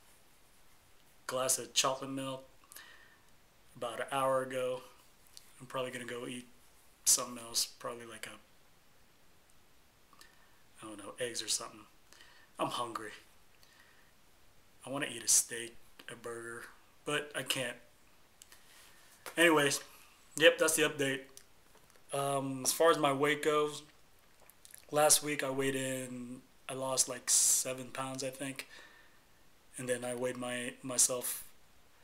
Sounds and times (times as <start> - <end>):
Inside, small room: 0.0 - 32.0
Speech: 1.3 - 2.5, 3.8 - 5.0, 5.6 - 6.5, 7.1 - 8.5, 10.8 - 11.9, 12.6 - 13.3, 14.8 - 17.9, 19.4 - 21.4, 22.1 - 23.9, 24.9 - 28.7, 29.8 - 31.5.